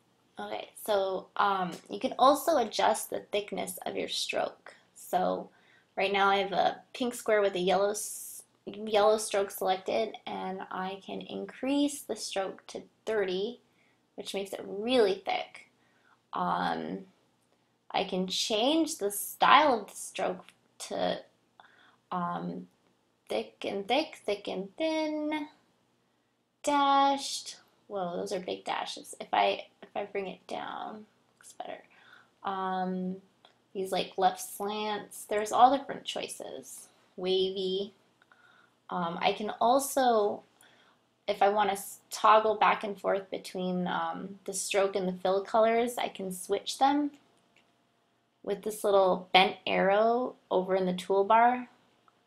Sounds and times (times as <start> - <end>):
Speech: 0.4 - 13.6, 14.2 - 15.7, 16.4 - 17.1, 17.9 - 21.3, 22.2 - 22.7, 23.3 - 25.6, 26.7 - 33.2, 33.8 - 38.0, 38.9 - 40.4, 41.3 - 47.2, 48.5 - 51.8.